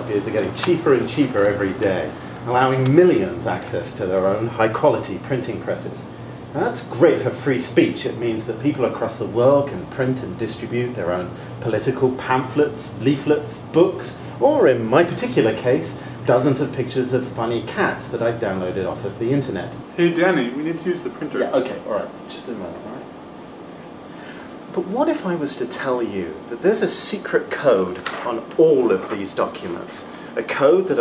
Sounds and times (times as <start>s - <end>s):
Speech: 0.0s - 23.2s, 24.6s - 31.0s.